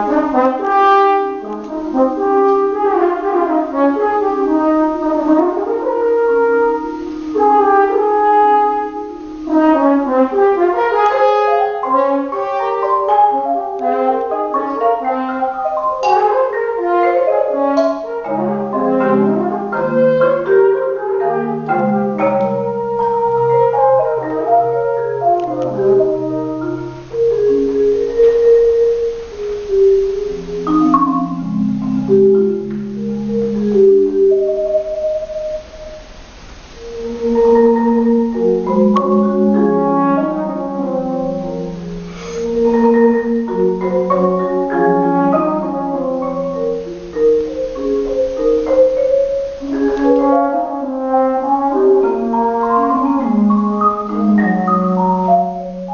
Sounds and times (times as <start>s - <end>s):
French horn: 0.0s - 55.9s.